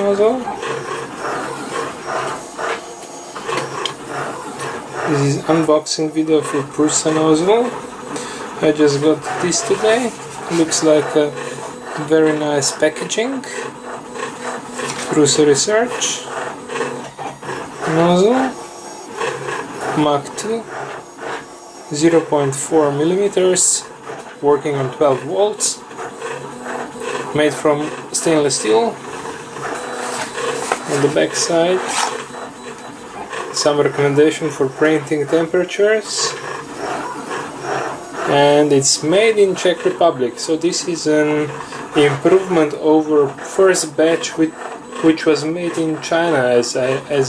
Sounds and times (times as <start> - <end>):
Speech: 0.0 - 0.5, 5.1 - 7.8, 8.6 - 11.4, 12.0 - 13.6, 15.1 - 16.3, 17.8 - 18.6, 19.9 - 20.7, 21.9 - 25.8, 27.3 - 29.0, 30.8 - 31.9, 33.5 - 36.4, 38.3 - 47.2.